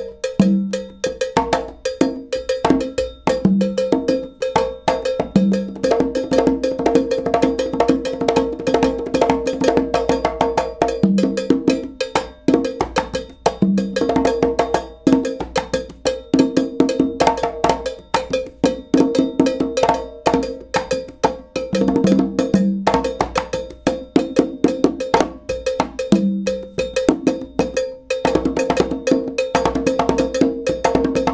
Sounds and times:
Music: 0.0 - 31.3.

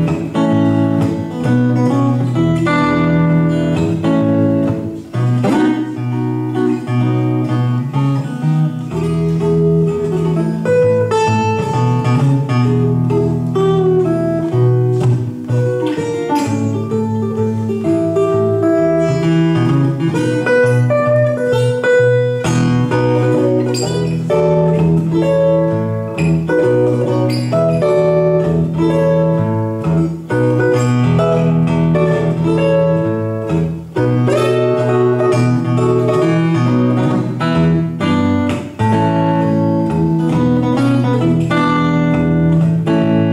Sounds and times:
Blues: 0.0 - 43.3
Guitar: 0.0 - 43.3.

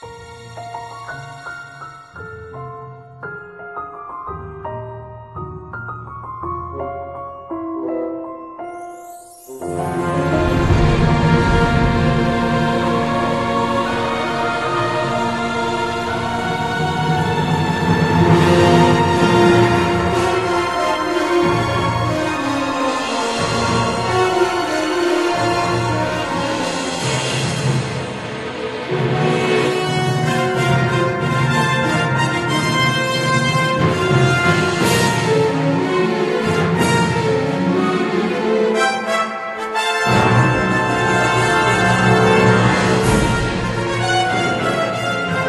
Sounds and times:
Theme music: 7.6 - 45.4.

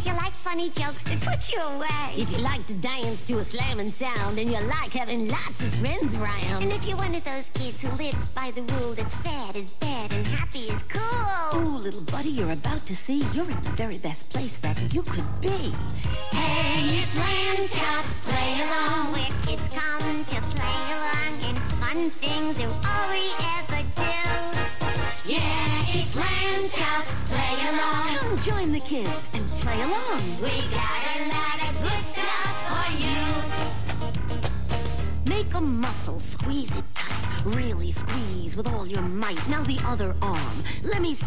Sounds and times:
Music: 0.0 - 41.2.

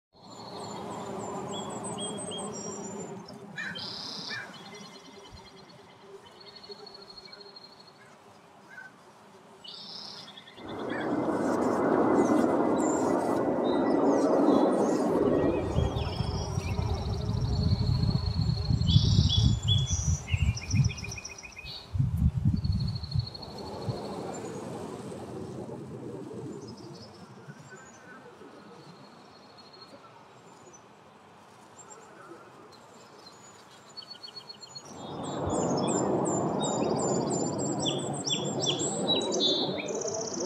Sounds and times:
Bee, wasp, etc.: 0.2 - 40.4
Fly, housefly: 0.4 - 24.5.

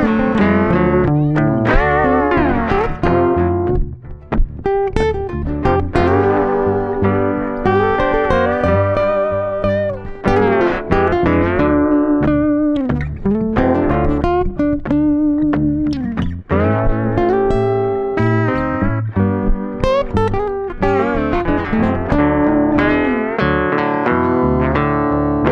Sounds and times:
Music: 0.0 - 25.5.

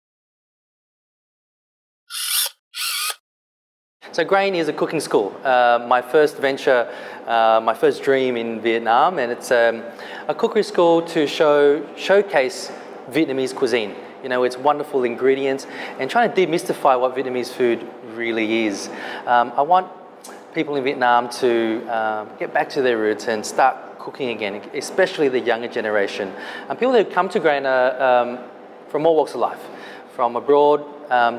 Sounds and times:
Speech: 4.1 - 31.3.

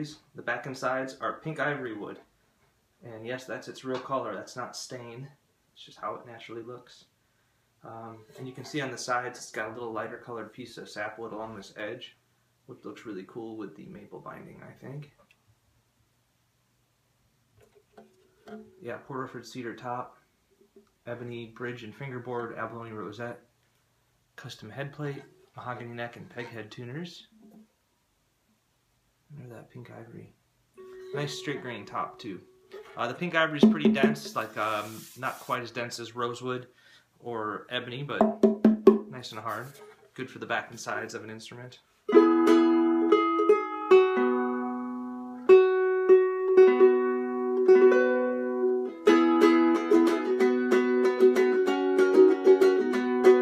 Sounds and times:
Speech: 0.0 - 2.3, 3.0 - 7.2, 7.8 - 15.2, 18.8 - 20.2, 21.0 - 23.5, 24.4 - 27.4, 29.3 - 30.4, 31.1 - 38.3, 39.0 - 41.9
Music: 17.9 - 18.8, 30.8 - 33.0, 33.6 - 34.4, 38.2 - 39.1, 42.1 - 53.4.

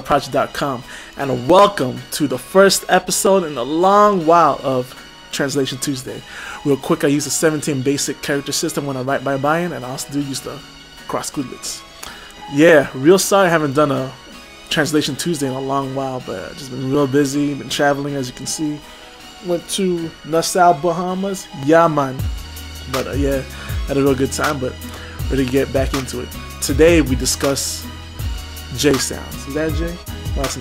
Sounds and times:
Speech: 0.0 - 11.8, 12.5 - 18.8, 19.4 - 22.3, 22.9 - 27.8, 28.7 - 30.6
Music: 0.0 - 30.6.

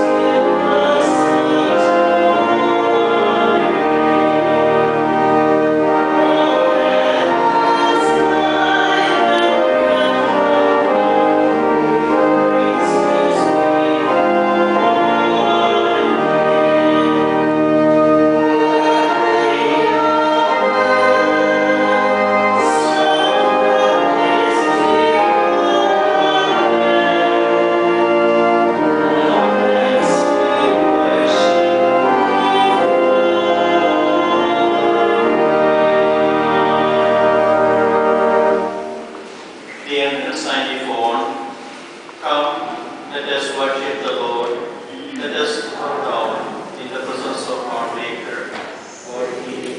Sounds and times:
Music: 0.0 - 42.7
Inside, large room or hall: 0.0 - 49.7
Speech: 39.8 - 41.4, 42.2 - 49.7.

